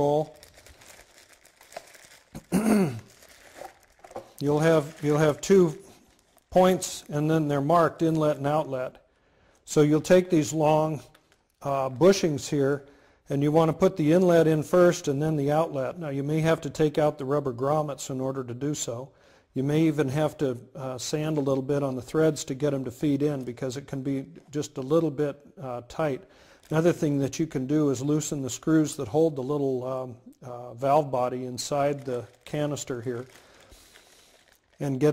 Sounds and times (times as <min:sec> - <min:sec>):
Speech: 0:00.0 - 0:00.4, 0:04.4 - 0:05.8, 0:06.5 - 0:09.0, 0:09.7 - 0:33.3, 0:34.8 - 0:35.1
Crumpling, crinkling: 0:00.0 - 0:07.4, 0:11.1 - 0:11.6, 0:26.5 - 0:27.4, 0:31.5 - 0:35.1.